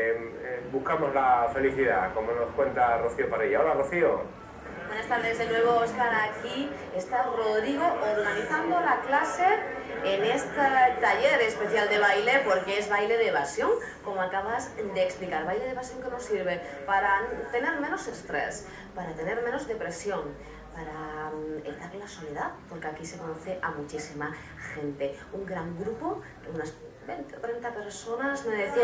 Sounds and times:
Speech: 4.9s - 28.8s.

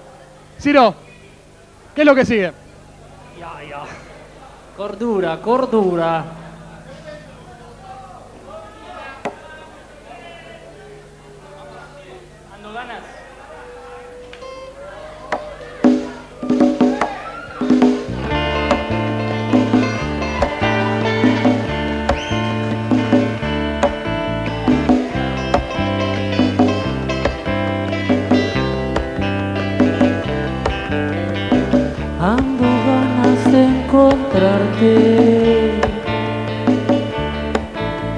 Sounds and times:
Speech: 0.0s - 17.4s.

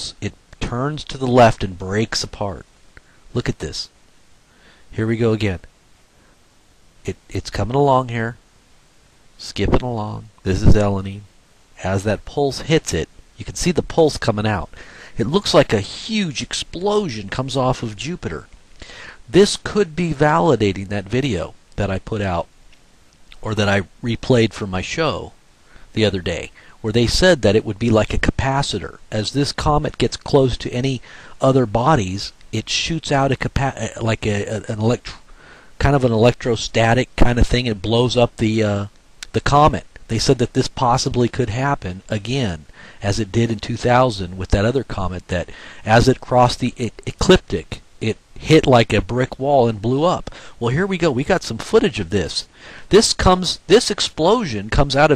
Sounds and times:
Speech: 0.0s - 2.7s, 3.3s - 4.0s, 4.9s - 5.7s, 7.0s - 8.4s, 9.4s - 18.5s, 19.3s - 22.5s, 23.3s - 35.2s, 35.8s - 55.1s.

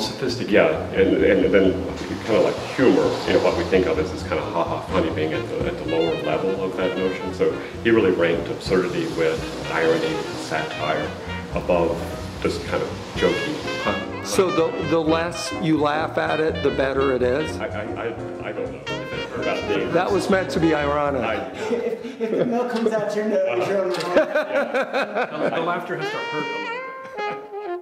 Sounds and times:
Speech: 0.0s - 13.5s, 14.3s - 24.6s, 25.4s - 26.7s
Saxophone: 2.0s - 21.2s, 25.9s - 27.8s.

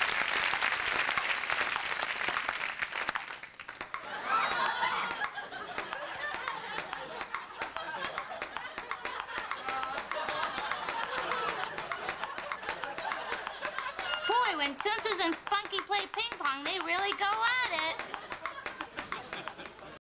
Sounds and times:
Speech: 14.3s - 18.0s.

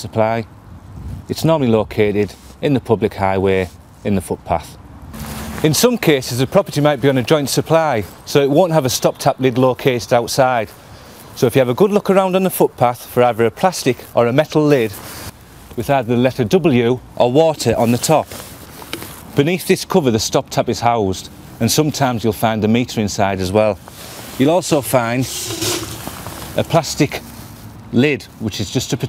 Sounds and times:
Speech: 0.0s - 0.5s, 1.3s - 4.8s, 5.6s - 10.8s, 11.4s - 15.0s, 15.8s - 18.3s, 19.4s - 23.8s, 24.4s - 25.4s, 26.6s - 27.2s, 27.9s - 29.0s.

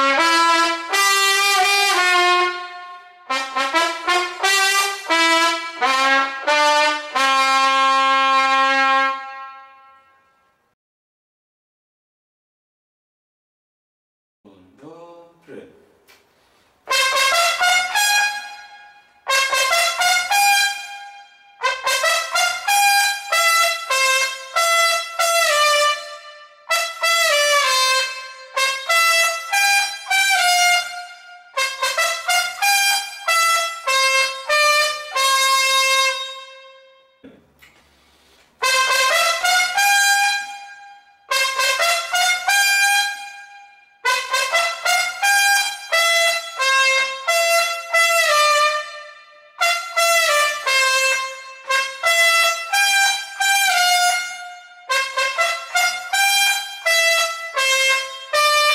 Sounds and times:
Trumpet: 0.0s - 10.7s, 16.8s - 37.3s, 38.3s - 58.7s
Wind instrument, woodwind instrument: 38.6s - 58.7s.

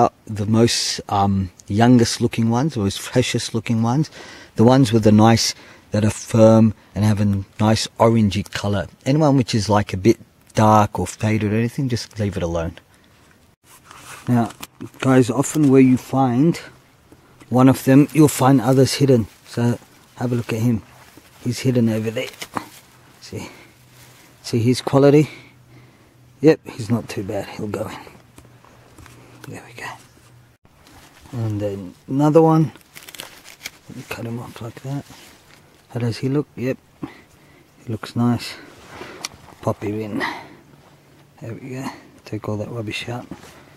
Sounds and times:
Speech: 0.0s - 12.8s, 14.3s - 16.8s, 17.5s - 23.7s, 24.4s - 25.4s, 26.4s - 28.2s, 29.5s - 30.1s, 31.3s - 32.8s, 33.9s - 35.2s, 35.9s - 36.8s, 37.8s - 38.7s, 39.6s - 40.6s, 41.4s - 43.4s.

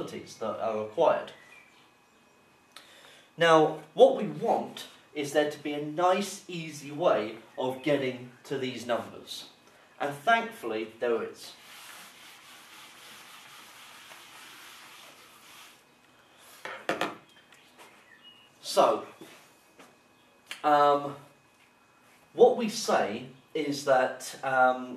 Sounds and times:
Speech: 0.0s - 1.4s, 3.4s - 11.6s, 18.6s - 19.2s, 20.6s - 21.3s, 22.4s - 24.9s.

